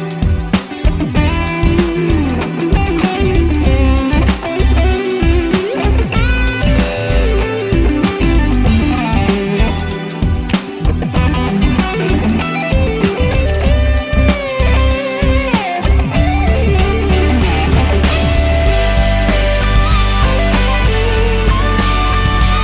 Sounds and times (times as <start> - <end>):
Bass guitar: 0.0 - 22.6
Electric guitar: 0.0 - 22.6
Strum: 0.2 - 22.6.